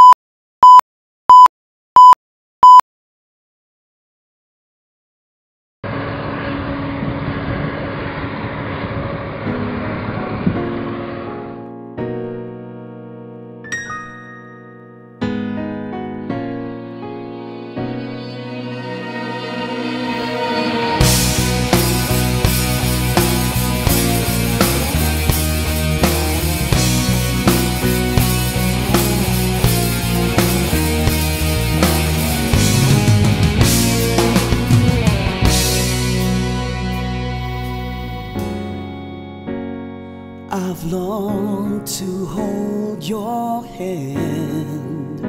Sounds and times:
Exciting music: 18.0s - 38.8s.

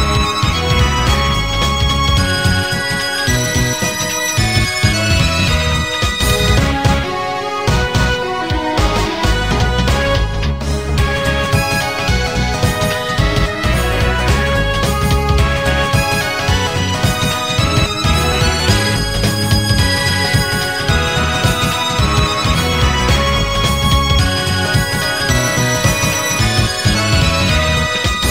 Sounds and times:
Background music: 0.0s - 28.3s
Video game music: 0.0s - 28.3s.

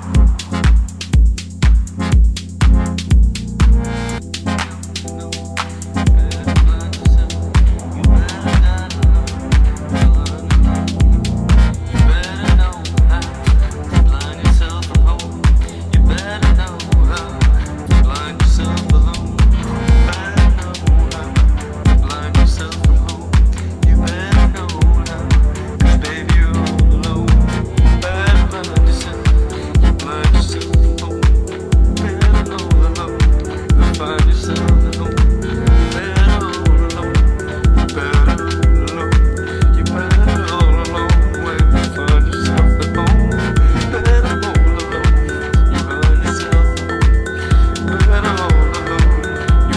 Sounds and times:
Music: 0.0s - 49.7s.

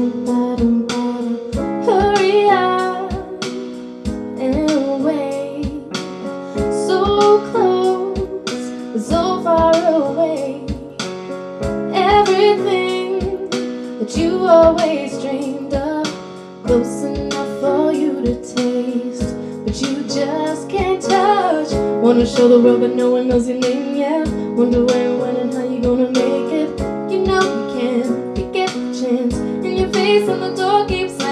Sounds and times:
Female singing: 0.0s - 3.4s, 4.4s - 5.9s, 6.8s - 10.9s, 11.9s - 31.3s
Music: 0.0s - 31.3s.

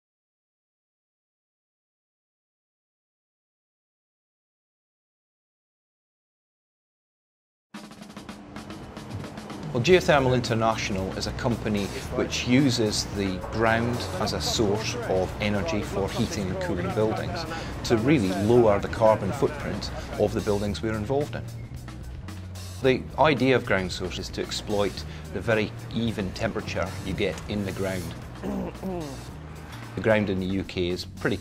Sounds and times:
Music: 7.7s - 31.4s
Speech: 9.8s - 21.4s, 22.8s - 29.2s, 30.0s - 31.4s.

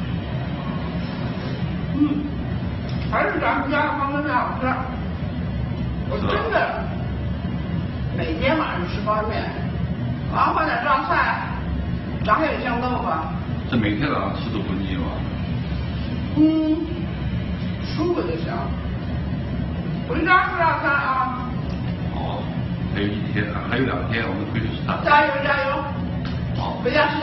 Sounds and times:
Male speech, man speaking: 13.7s - 15.2s, 22.2s - 25.1s.

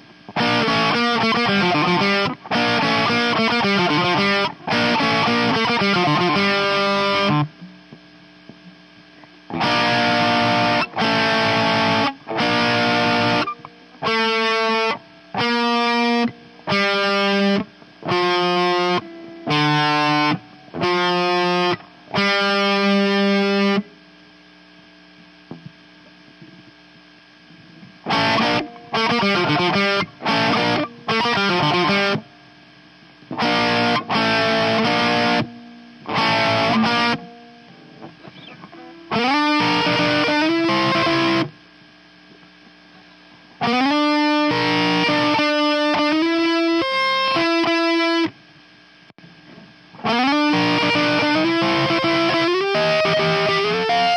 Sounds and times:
Electric guitar: 0.0s - 54.1s.

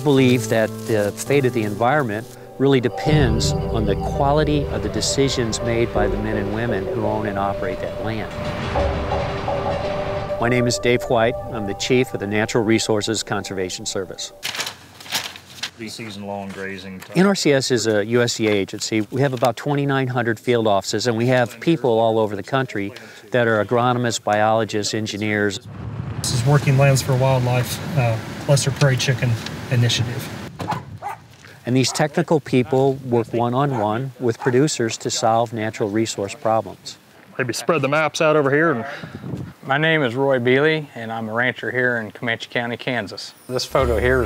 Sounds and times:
Speech: 0.0s - 8.5s, 10.4s - 14.4s, 15.8s - 25.6s, 26.3s - 30.3s, 31.6s - 39.0s, 39.7s - 44.2s
Outside, rural or natural: 0.0s - 19.9s, 23.1s - 42.3s.

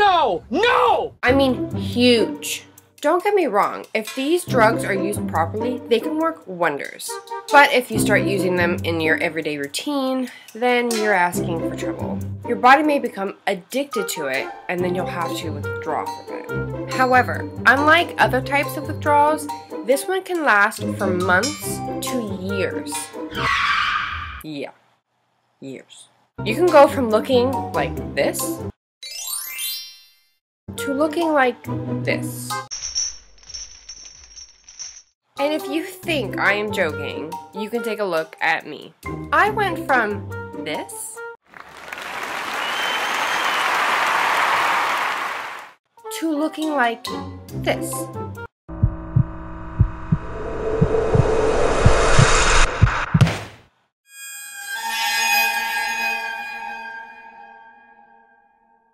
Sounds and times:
Speech: 0.0s - 23.1s, 24.5s - 24.8s, 25.6s - 28.6s, 30.8s - 32.6s, 35.4s - 41.2s, 46.1s - 48.1s
Music: 1.2s - 23.4s, 26.4s - 29.4s, 30.7s - 32.7s, 35.4s - 41.4s, 45.9s - 48.5s.

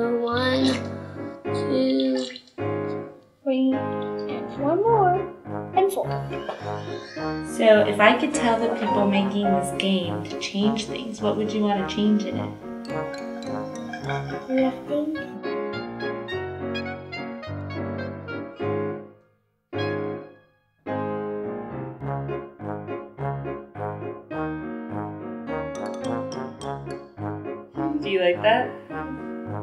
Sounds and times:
Speech: 0.0s - 0.9s, 1.6s - 2.4s, 3.5s - 6.2s, 7.5s - 12.5s, 14.4s - 15.2s, 27.9s - 28.8s
Music: 0.0s - 29.6s.

